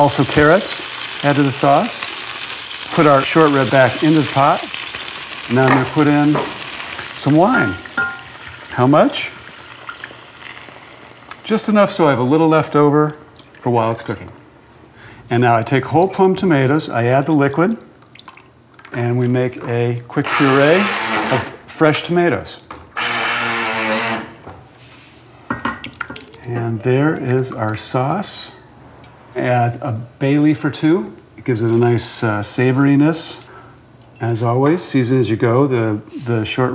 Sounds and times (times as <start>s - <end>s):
Speech: 0.0s - 2.1s, 2.9s - 4.7s, 5.5s - 6.5s, 7.2s - 7.9s, 8.7s - 9.4s, 11.4s - 14.3s, 15.3s - 17.8s, 18.9s - 22.7s, 26.4s - 28.6s, 29.4s - 33.5s, 34.2s - 36.7s.